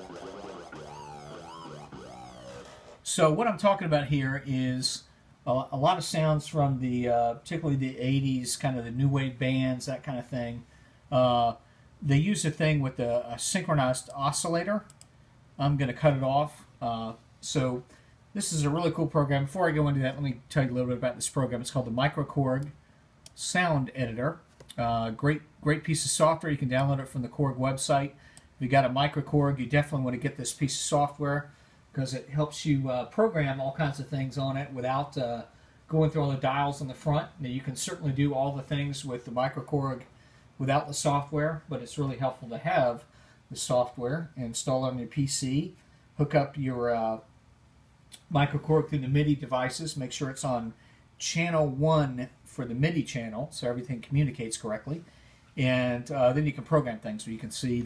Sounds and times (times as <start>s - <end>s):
Speech: 3.0s - 15.0s, 15.6s - 47.3s, 48.2s - 57.8s.